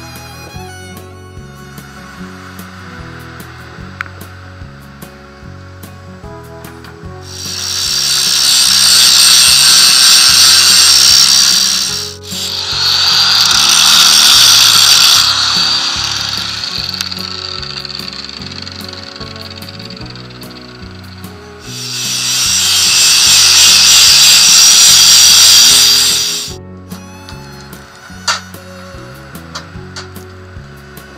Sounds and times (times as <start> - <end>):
Power tool: 0.0 - 5.9, 7.2 - 26.6, 27.3 - 31.1.